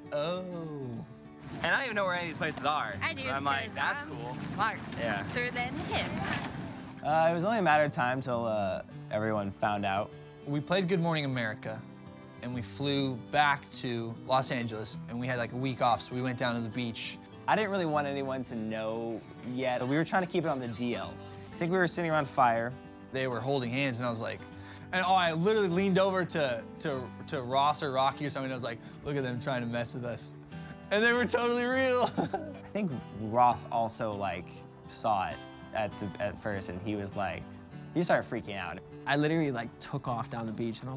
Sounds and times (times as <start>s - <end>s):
Music: 0.0s - 40.9s.